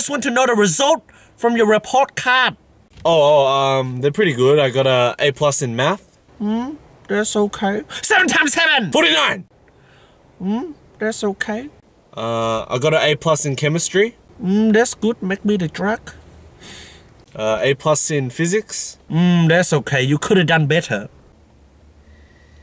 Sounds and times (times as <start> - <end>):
Speech: 0.0 - 9.5, 10.4 - 16.2, 17.3 - 21.1.